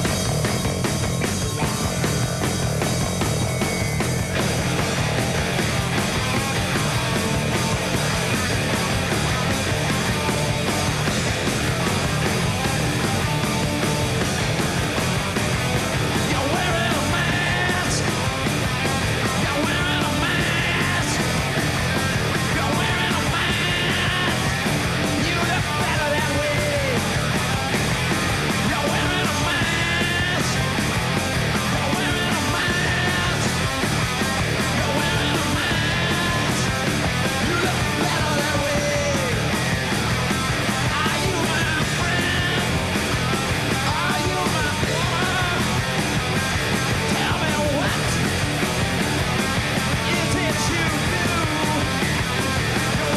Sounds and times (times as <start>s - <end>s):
Music: 0.0s - 53.1s.